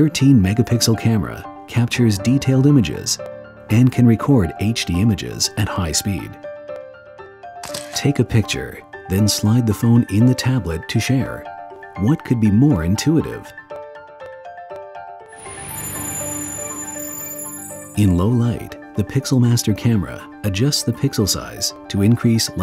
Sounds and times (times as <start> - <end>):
Speech: 0.0 - 6.4, 8.0 - 11.4, 12.0 - 13.5, 18.0 - 22.6
Music: 0.0 - 22.6.